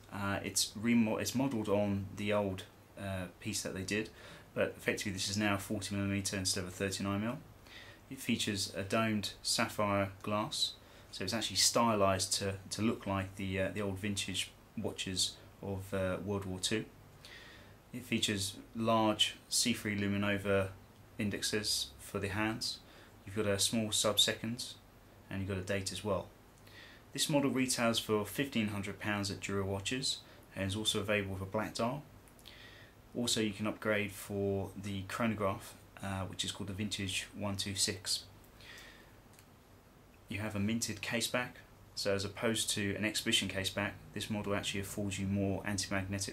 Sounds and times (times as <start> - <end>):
Speech: 0.1 - 7.4, 8.1 - 16.9, 17.9 - 26.3, 27.1 - 32.1, 33.1 - 38.3, 40.3 - 46.3.